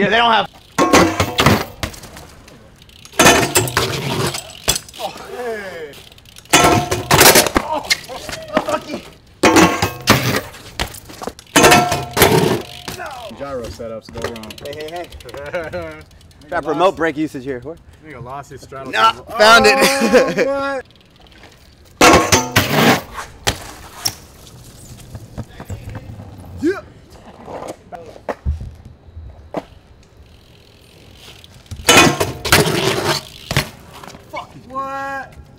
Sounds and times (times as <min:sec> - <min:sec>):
Bicycle: 0:00.0 - 0:35.5
Outside, urban or manmade: 0:00.0 - 0:35.5
Speech: 0:25.4 - 0:26.8.